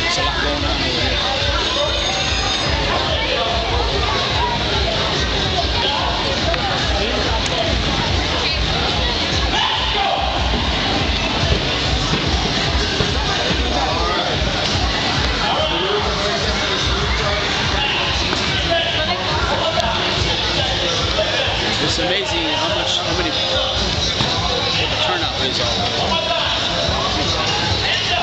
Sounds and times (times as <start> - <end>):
Speech: 0.0 - 12.1, 12.7 - 28.2
Music: 0.0 - 28.2.